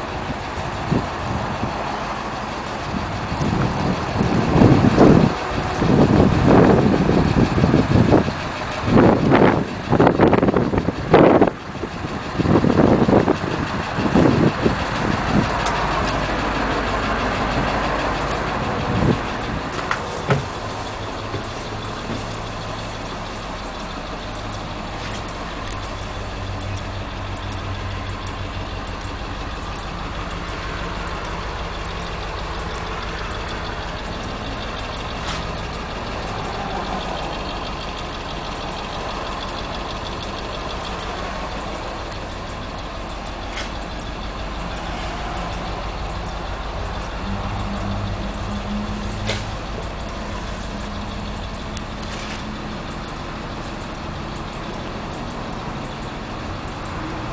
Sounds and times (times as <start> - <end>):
Idling: 0.0 - 57.3
Vehicle: 0.0 - 57.3.